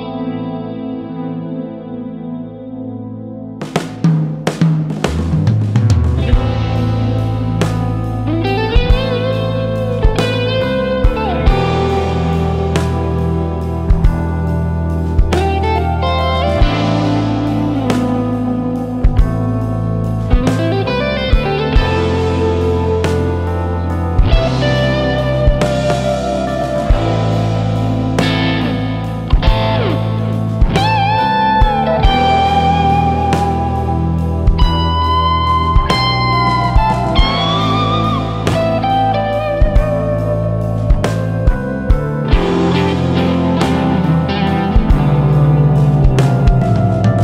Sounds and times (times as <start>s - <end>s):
Electric guitar: 0.0s - 47.2s
Progressive rock: 0.0s - 47.2s
Psychedelic rock: 0.0s - 47.2s.